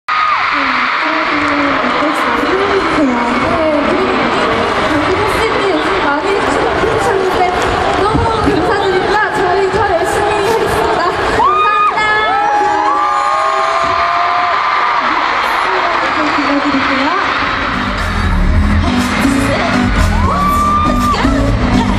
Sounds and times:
Cheering: 0:00.1 - 0:21.9
Crowd: 0:00.1 - 0:21.9.

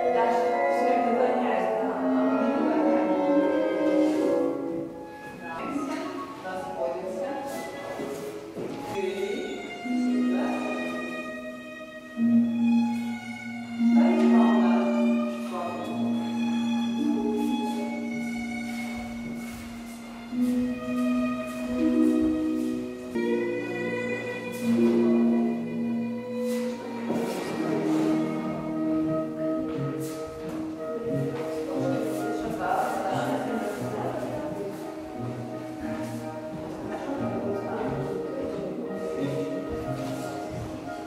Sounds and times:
Classical music: 0:00.0 - 0:41.0.

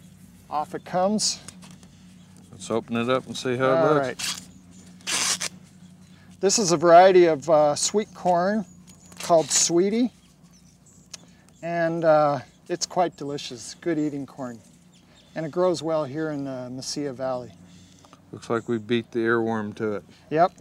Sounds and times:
Outside, rural or natural: 0:00.0 - 0:20.6.

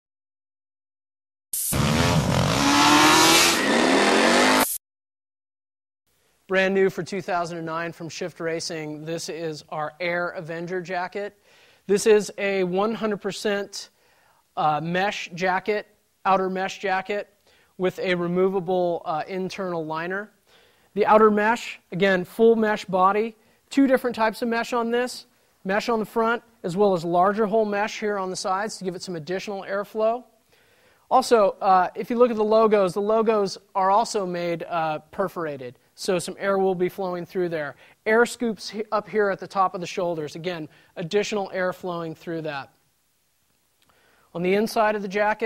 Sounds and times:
Motorcycle: 0:01.6 - 0:04.8
Speech: 0:06.5 - 0:13.9, 0:14.6 - 0:20.4, 0:21.0 - 0:30.3, 0:31.1 - 0:42.8, 0:44.3 - 0:45.4.

